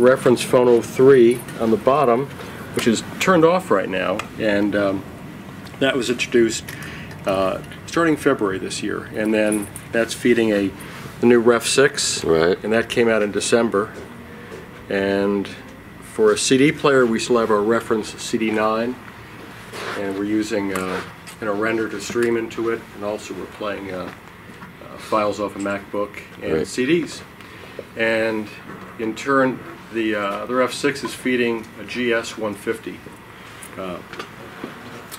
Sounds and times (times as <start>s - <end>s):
Speech: 0.0s - 5.0s, 5.8s - 6.7s, 7.3s - 14.0s, 14.9s - 19.0s, 19.9s - 24.2s, 24.8s - 27.3s, 28.0s - 33.0s, 33.8s - 34.1s.